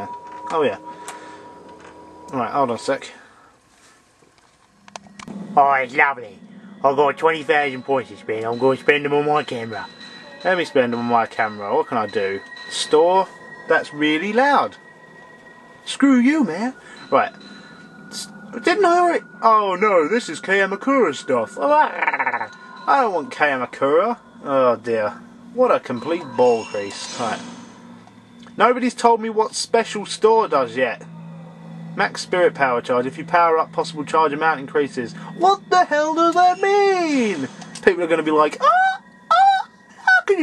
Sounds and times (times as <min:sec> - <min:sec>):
Speech: 0:02.3 - 0:03.2, 0:05.6 - 0:14.8, 0:15.9 - 0:17.3, 0:18.2 - 0:27.4, 0:28.6 - 0:31.0, 0:32.0 - 0:38.7, 0:40.1 - 0:40.4.